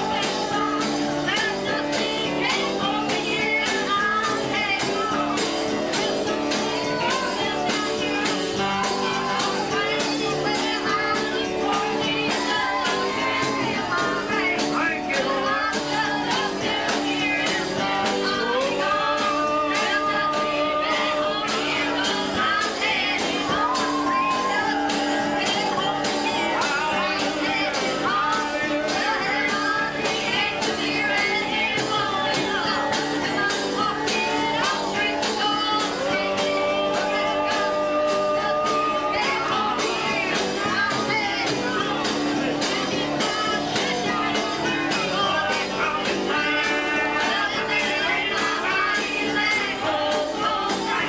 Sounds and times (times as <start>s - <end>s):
Choir: 0.0s - 51.0s
Female singing: 0.0s - 51.0s
Male singing: 17.2s - 23.0s, 34.2s - 41.4s, 43.0s - 51.0s.